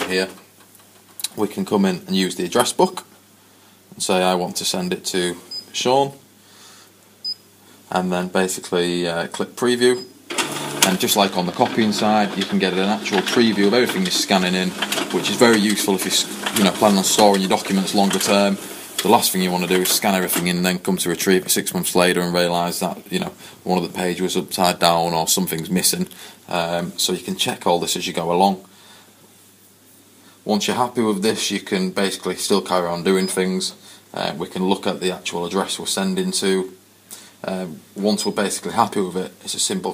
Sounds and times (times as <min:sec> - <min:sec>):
Speech: 0:00.0 - 0:00.4, 0:01.2 - 0:03.1, 0:03.9 - 0:06.2, 0:07.9 - 0:10.1, 0:10.8 - 0:28.7, 0:30.4 - 0:36.8, 0:37.4 - 0:39.9
Printer: 0:10.3 - 0:20.5.